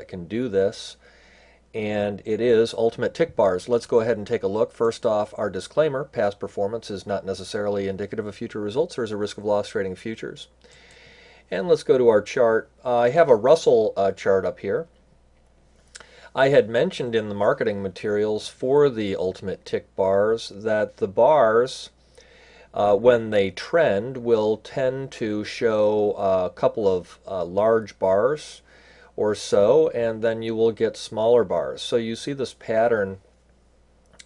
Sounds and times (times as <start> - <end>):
Speech: 0.0 - 1.0, 1.8 - 10.6, 11.5 - 15.0, 16.3 - 22.0, 22.7 - 33.2.